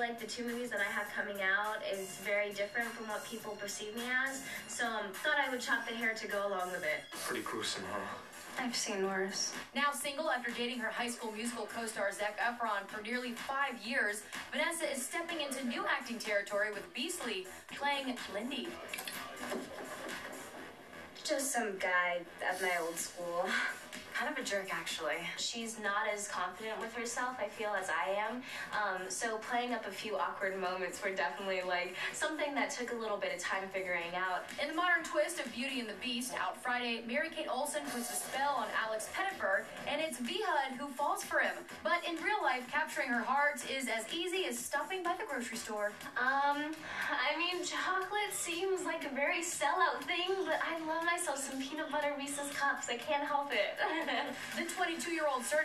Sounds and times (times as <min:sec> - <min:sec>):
Speech: 0:00.0 - 0:18.7, 0:21.2 - 0:55.6
Music: 0:00.0 - 0:55.6.